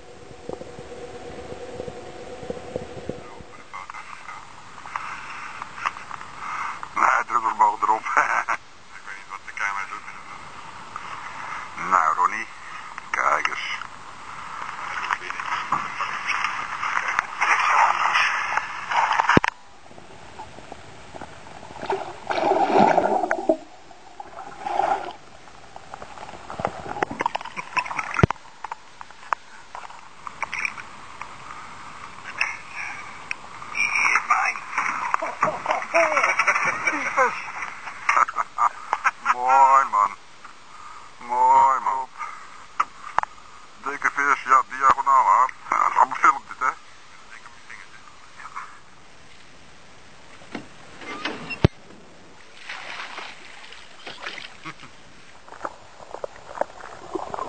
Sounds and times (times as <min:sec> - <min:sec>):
Speech: 0:07.0 - 0:10.2, 0:11.8 - 0:12.5, 0:13.1 - 0:13.9, 0:33.8 - 0:34.6, 0:38.2 - 0:40.2, 0:41.2 - 0:42.2, 0:43.8 - 0:48.8.